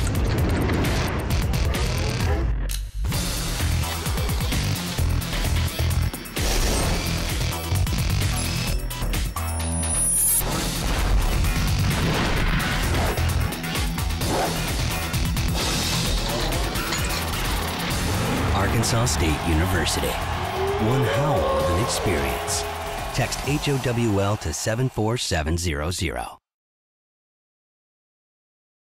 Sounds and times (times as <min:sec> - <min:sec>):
Music: 0:00.0 - 0:26.2
Speech: 0:18.5 - 0:26.4
Howl: 0:20.5 - 0:22.8.